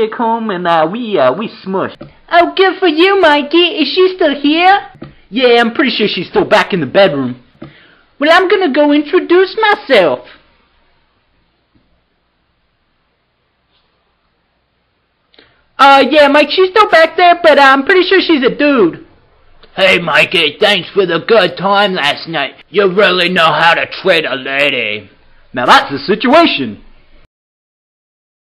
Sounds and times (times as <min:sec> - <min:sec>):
Speech: 0:00.0 - 0:07.5, 0:08.2 - 0:10.4, 0:15.8 - 0:19.1, 0:19.7 - 0:26.9.